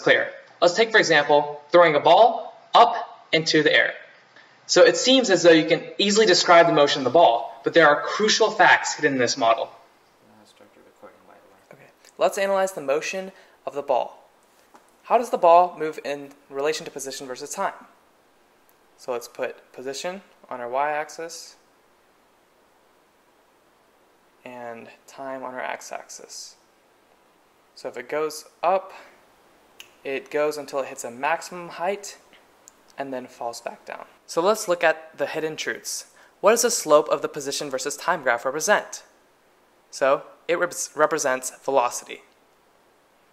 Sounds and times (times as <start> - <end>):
Speech: 0.0 - 4.0, 4.7 - 14.2, 15.1 - 18.0, 19.0 - 21.6, 24.4 - 26.6, 27.8 - 29.1, 30.0 - 32.3, 33.0 - 39.1, 39.9 - 42.3.